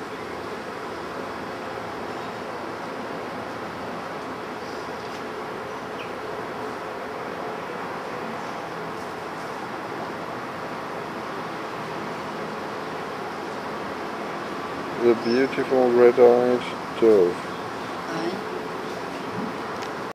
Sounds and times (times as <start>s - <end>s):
Speech: 15.0s - 17.4s, 18.1s - 18.4s.